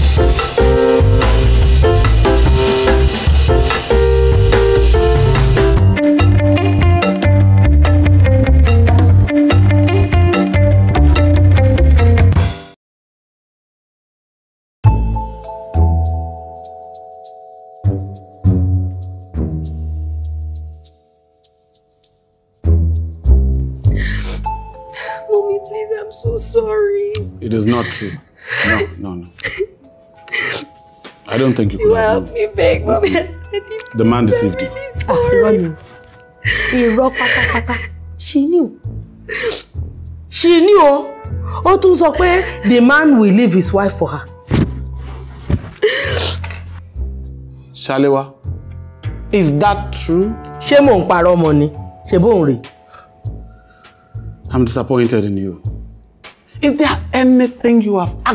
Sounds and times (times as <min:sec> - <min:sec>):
Music: 0:00.0 - 0:12.8, 0:14.8 - 0:58.3.